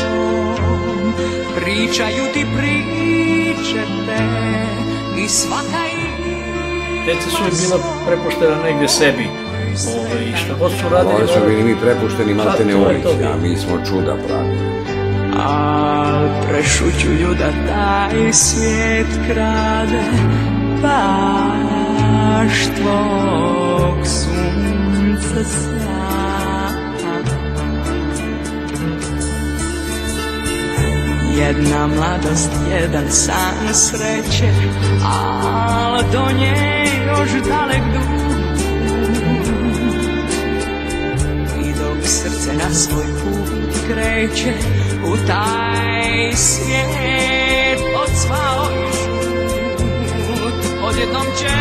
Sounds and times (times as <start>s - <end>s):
Christian music: 0.0s - 51.6s.